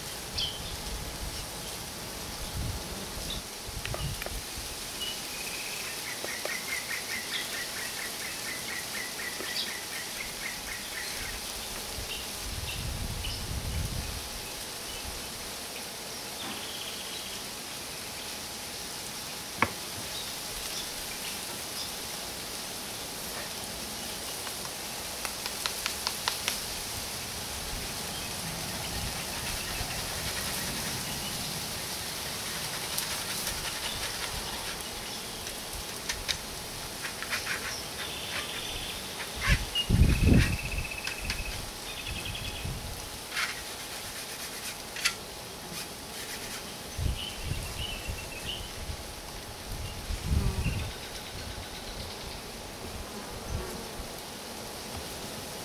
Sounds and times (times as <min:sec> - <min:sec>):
Bee, wasp, etc.: 0:00.0 - 0:55.6
Fly, housefly: 0:00.0 - 0:55.6.